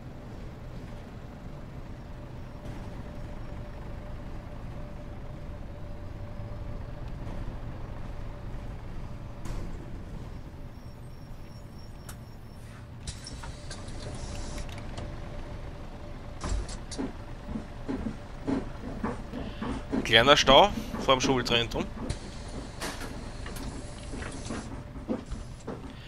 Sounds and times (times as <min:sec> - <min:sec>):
Bus: 0:00.0 - 0:26.0.